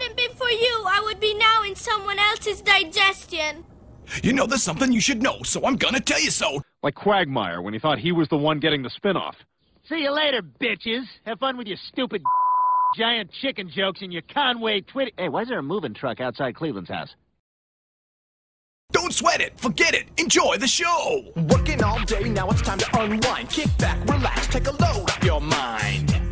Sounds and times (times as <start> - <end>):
Speech: 4.2 - 12.2, 13.0 - 17.2, 18.9 - 21.4.